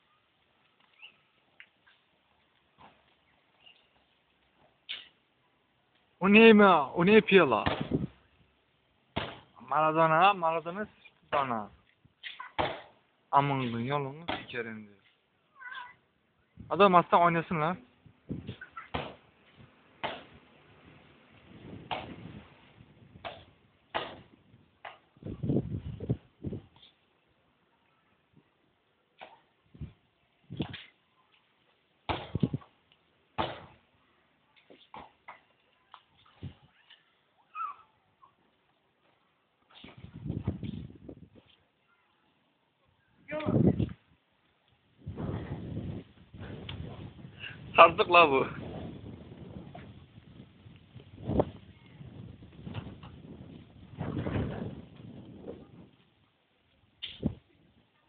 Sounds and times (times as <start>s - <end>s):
Speech: 16.7s - 17.8s, 47.8s - 48.6s.